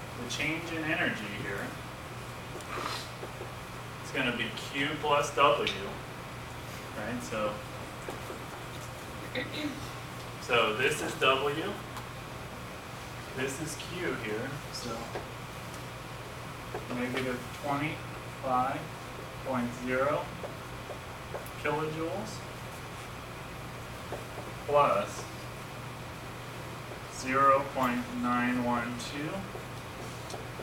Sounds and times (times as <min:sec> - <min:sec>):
Speech: 0:00.2 - 0:01.8, 0:04.0 - 0:06.0, 0:07.0 - 0:07.6, 0:09.4 - 0:09.8, 0:10.4 - 0:11.8, 0:13.4 - 0:15.2, 0:16.9 - 0:18.9, 0:19.5 - 0:20.4, 0:21.6 - 0:22.5, 0:24.7 - 0:25.3, 0:27.1 - 0:29.5.